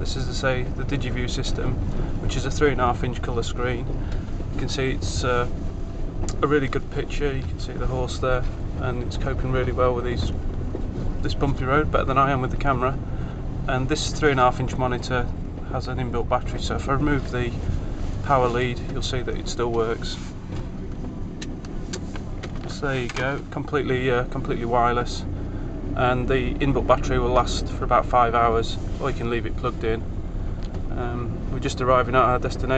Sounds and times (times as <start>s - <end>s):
Speech: 0.0s - 3.9s, 4.6s - 5.6s, 6.3s - 10.4s, 11.2s - 13.0s, 13.7s - 17.6s, 18.2s - 20.3s, 22.6s - 25.3s, 26.0s - 30.0s, 30.9s - 32.7s.